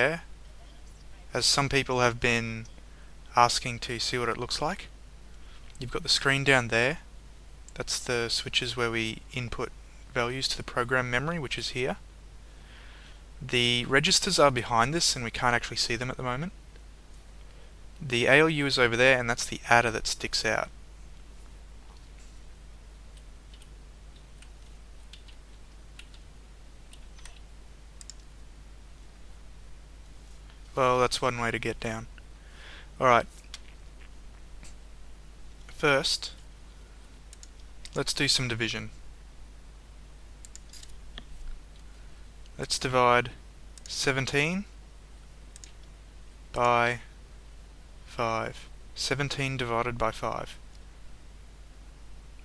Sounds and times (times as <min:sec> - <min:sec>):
Speech: 0:00.0 - 0:02.7, 0:03.3 - 0:04.9, 0:05.8 - 0:07.1, 0:07.8 - 0:12.0, 0:13.4 - 0:16.6, 0:18.0 - 0:20.7, 0:30.8 - 0:32.1, 0:33.0 - 0:33.3, 0:35.7 - 0:36.4, 0:38.0 - 0:39.0, 0:42.6 - 0:44.7, 0:46.5 - 0:47.1, 0:48.1 - 0:50.6.